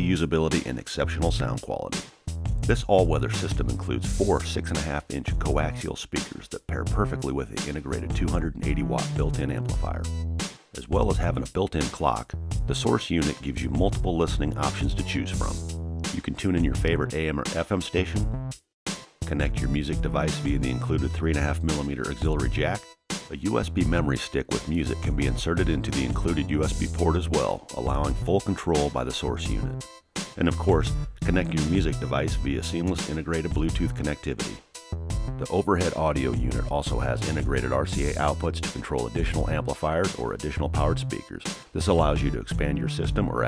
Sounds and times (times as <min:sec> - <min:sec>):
Speech: 0:00.0 - 0:02.0, 0:02.6 - 0:10.1, 0:10.8 - 0:18.3, 0:19.2 - 0:29.8, 0:30.4 - 0:34.6, 0:35.4 - 0:43.4
Music: 0:00.0 - 0:43.4.